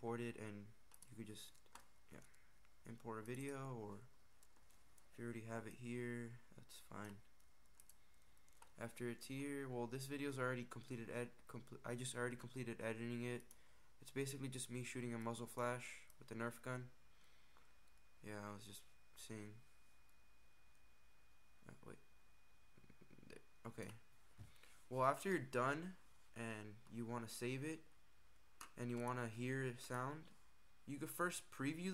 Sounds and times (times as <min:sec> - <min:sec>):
Speech: 0:00.0 - 0:04.1, 0:05.1 - 0:07.3, 0:08.8 - 0:17.0, 0:18.2 - 0:19.6, 0:21.6 - 0:22.0, 0:22.8 - 0:24.1, 0:24.9 - 0:27.9, 0:28.6 - 0:31.9.